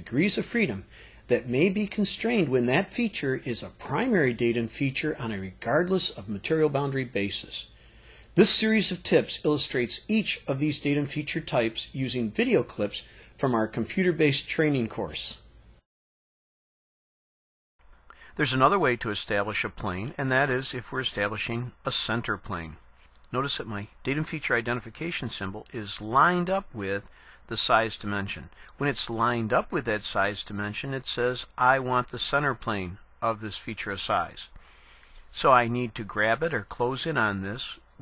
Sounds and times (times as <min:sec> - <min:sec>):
Speech: 0:00.0 - 0:07.7, 0:08.4 - 0:15.5, 0:18.3 - 0:34.6, 0:35.3 - 0:38.0.